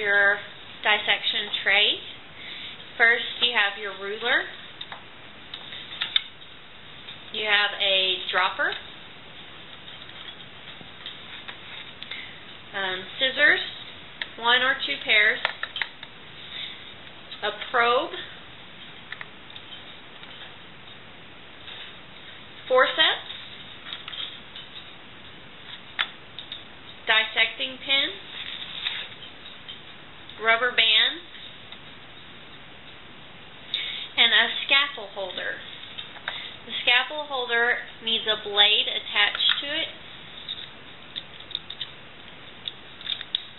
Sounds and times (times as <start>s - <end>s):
Speech: 0.0s - 2.1s, 3.0s - 4.6s, 7.4s - 8.8s, 12.7s - 13.7s, 14.4s - 15.5s, 17.4s - 18.3s, 22.7s - 23.3s, 27.1s - 28.2s, 30.4s - 31.3s, 34.2s - 35.7s, 36.7s - 40.0s.